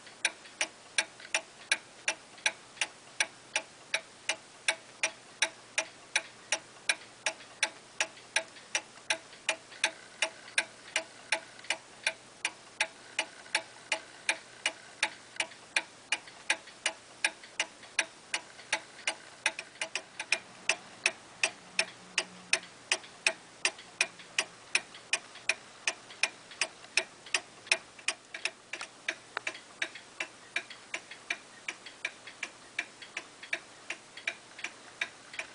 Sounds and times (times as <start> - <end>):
Tick-tock: 0.0 - 35.5
Tick: 0.2 - 35.5.